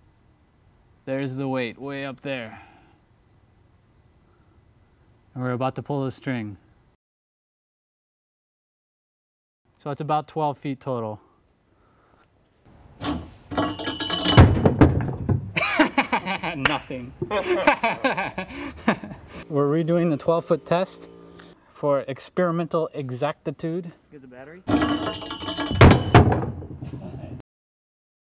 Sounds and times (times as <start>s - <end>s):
Speech: 1.1s - 2.6s, 5.4s - 6.6s, 9.8s - 11.2s, 16.5s - 17.1s, 19.5s - 21.1s, 21.8s - 24.7s.